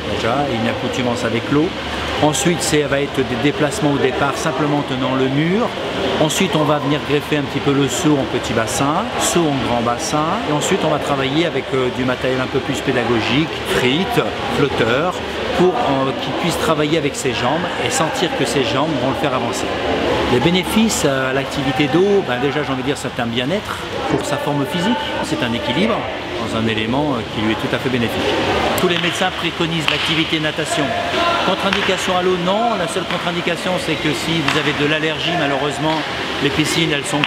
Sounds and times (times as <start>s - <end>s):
Speech: 0.0s - 37.2s.